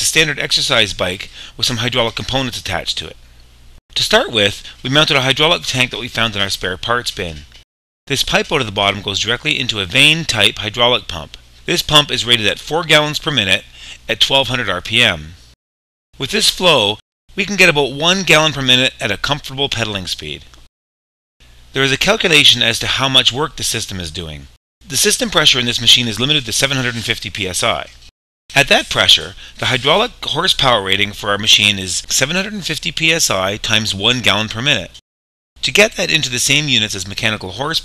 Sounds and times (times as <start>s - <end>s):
Speech: 0.0s - 3.2s, 4.0s - 7.5s, 8.1s - 15.4s, 16.2s - 20.6s, 21.7s - 35.0s, 35.6s - 37.8s.